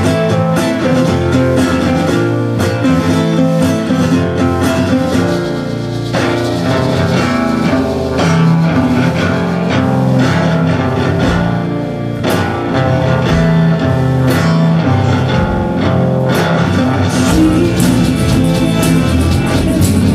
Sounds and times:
Music: 0:00.0 - 0:20.1.

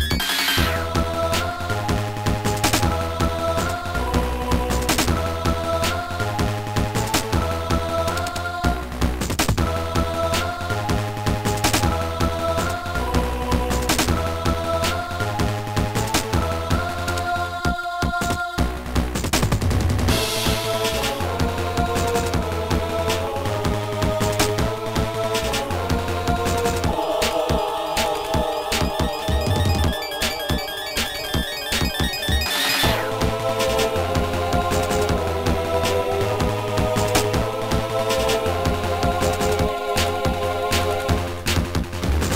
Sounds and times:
Music: 0:00.0 - 0:42.3.

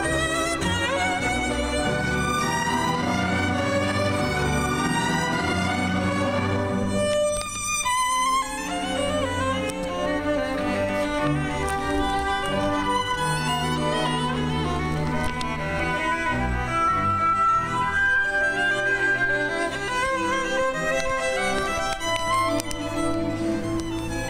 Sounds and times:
Violin, fiddle: 0:00.0 - 0:24.2.

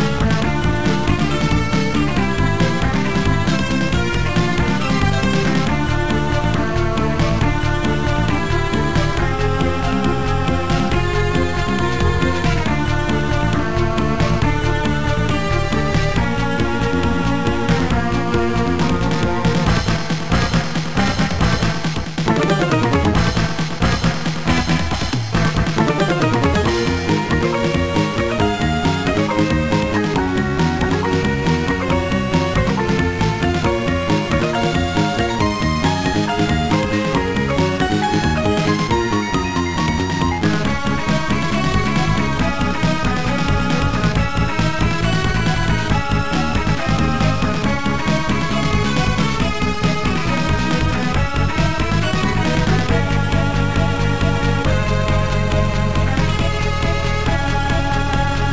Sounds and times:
Music: 0:00.0 - 0:58.5.

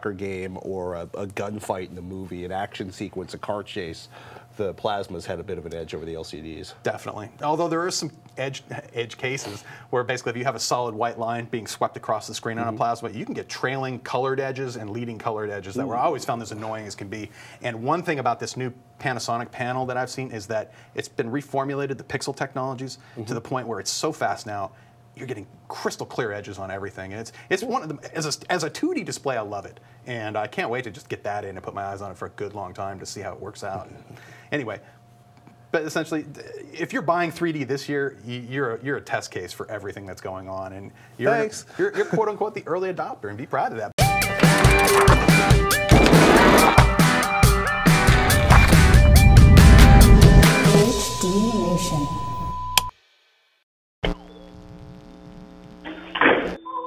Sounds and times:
Speech: 0:00.0 - 0:34.8, 0:35.7 - 0:44.0, 0:50.6 - 0:52.4
Music: 0:44.0 - 0:51.4.

